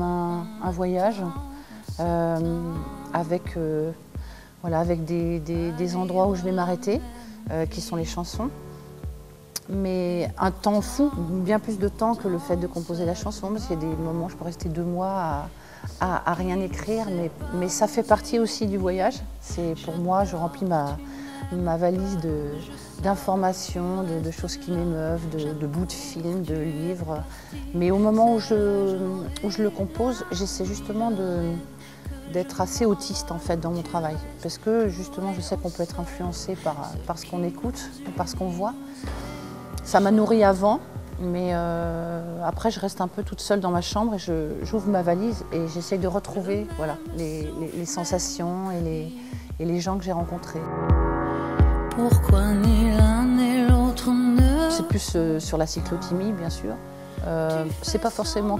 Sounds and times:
Speech: 0.0s - 4.0s, 4.6s - 8.5s, 9.6s - 31.7s, 32.3s - 38.8s, 39.8s - 50.7s, 54.4s - 58.5s
Music: 0.0s - 58.5s.

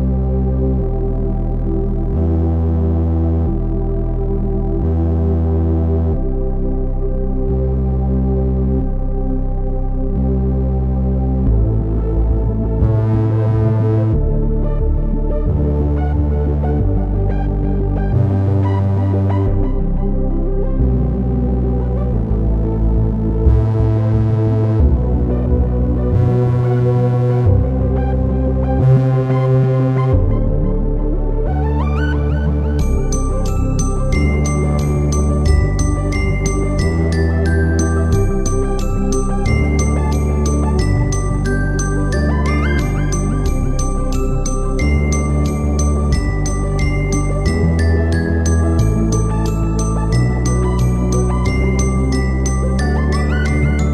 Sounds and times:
Background music: 0.0s - 53.9s.

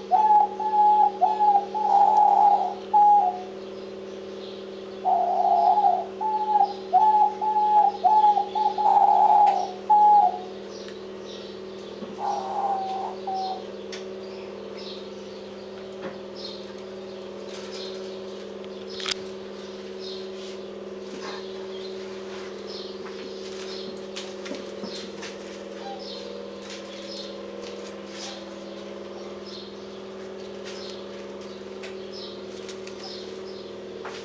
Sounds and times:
Bird: 0.0s - 34.2s.

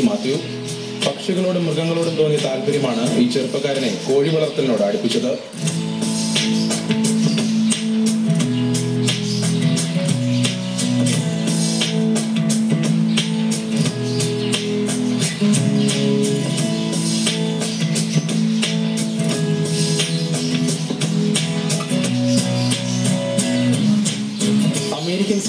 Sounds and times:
Music: 0.0s - 25.4s.

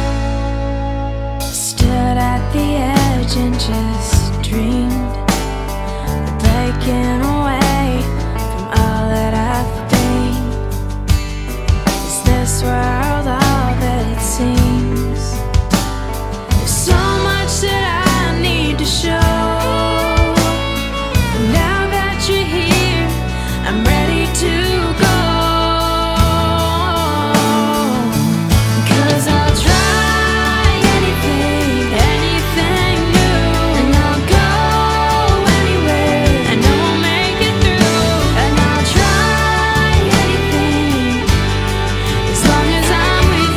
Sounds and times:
Music: 0.0s - 43.5s.

